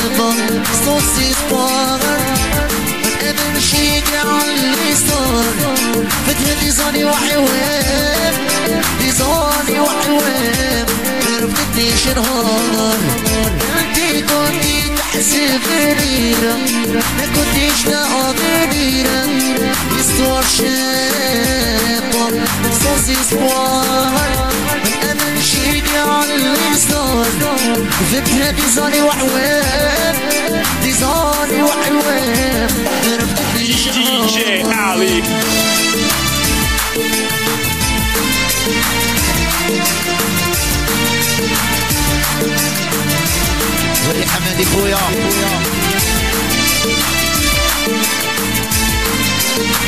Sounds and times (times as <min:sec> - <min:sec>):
Music of Africa: 0:00.0 - 0:49.8.